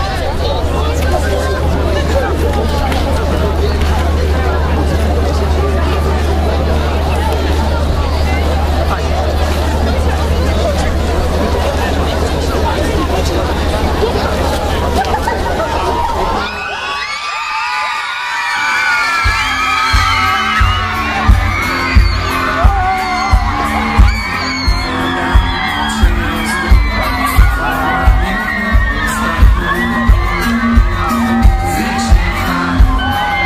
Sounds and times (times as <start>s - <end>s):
Crowd: 0.0s - 33.4s
Music: 18.8s - 33.4s.